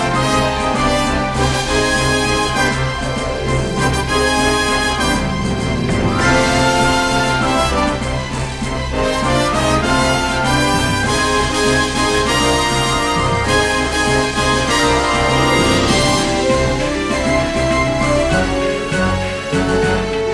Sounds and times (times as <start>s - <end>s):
Music: 0.0s - 20.3s.